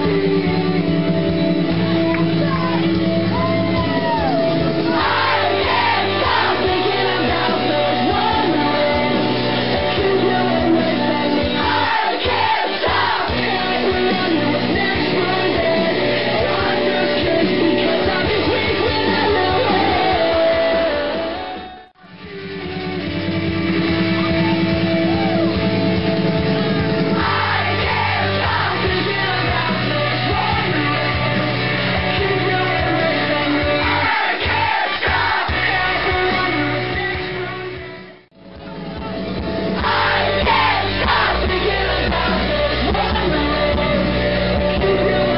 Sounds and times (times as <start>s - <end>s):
Music: 0.0s - 45.3s.